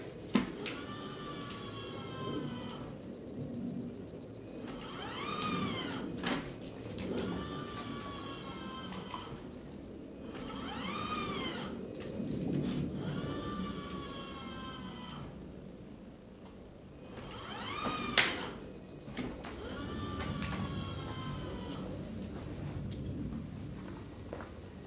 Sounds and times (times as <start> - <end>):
Sliding door: 0.0 - 3.0, 4.4 - 15.4, 17.0 - 23.3.